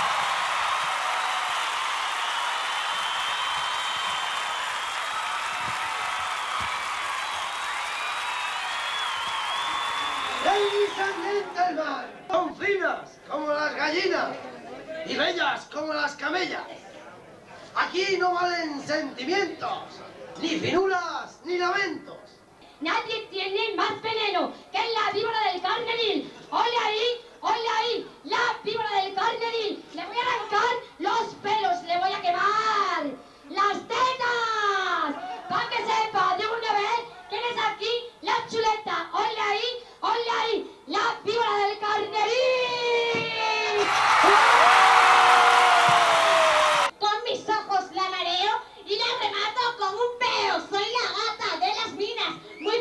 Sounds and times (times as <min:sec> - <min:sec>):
Speech: 0:10.4 - 0:43.8, 0:47.0 - 0:52.8.